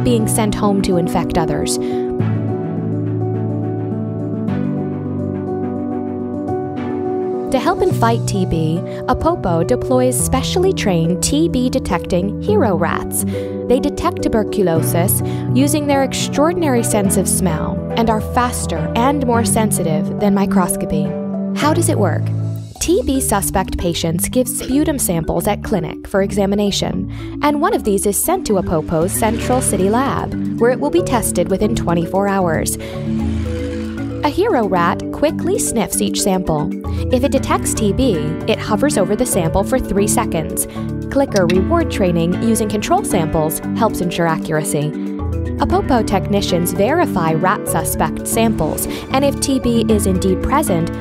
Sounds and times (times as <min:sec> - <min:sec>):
Speech: 0:00.0 - 0:01.8, 0:07.5 - 0:32.8, 0:34.2 - 0:45.0, 0:45.6 - 0:51.0
Music: 0:00.0 - 0:51.0.